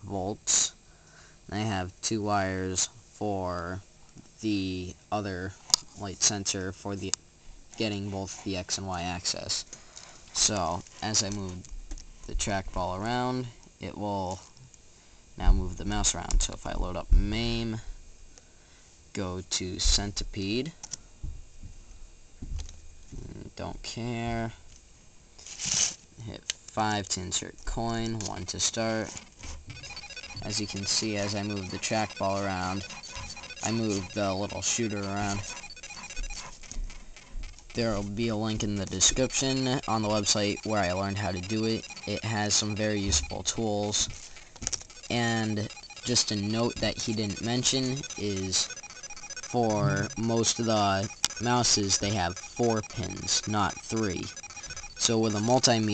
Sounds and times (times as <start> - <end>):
Speech: 0.0 - 0.8, 1.5 - 3.8, 4.4 - 7.2, 7.8 - 9.7, 10.4 - 11.6, 12.3 - 14.4, 15.4 - 17.8, 19.2 - 20.8, 23.1 - 24.6, 26.2 - 29.1, 30.4 - 32.9, 33.6 - 35.5, 37.8 - 44.1, 45.1 - 48.7, 49.5 - 54.3, 55.0 - 55.9.